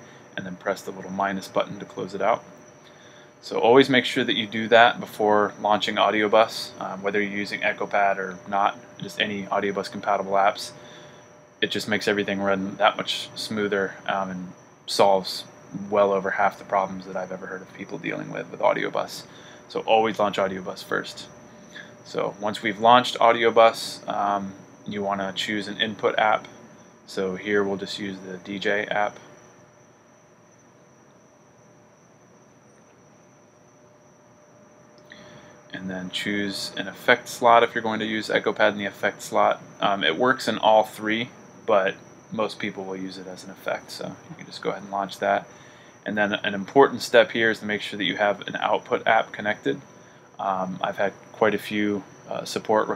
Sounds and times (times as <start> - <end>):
Speech: 0.4 - 2.5, 3.4 - 10.8, 11.6 - 21.4, 22.1 - 26.5, 27.1 - 29.3, 35.7 - 49.8, 50.4 - 52.9.